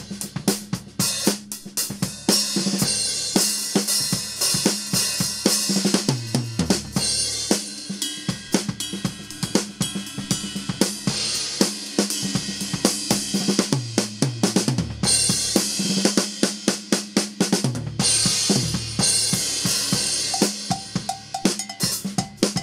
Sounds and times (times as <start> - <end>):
Bass drum: 0.0 - 3.4, 4.0 - 22.6
Drum kit: 0.0 - 22.6
Drum roll: 0.0 - 22.6.